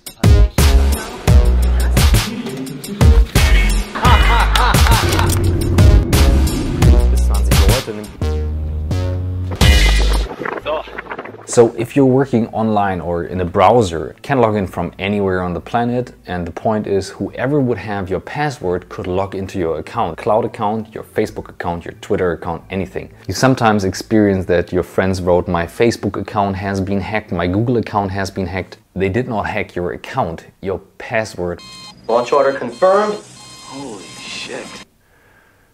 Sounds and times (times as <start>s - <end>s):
Music: 0.0s - 26.1s, 31.6s - 34.9s
Speech: 7.2s - 8.2s, 11.5s - 34.8s.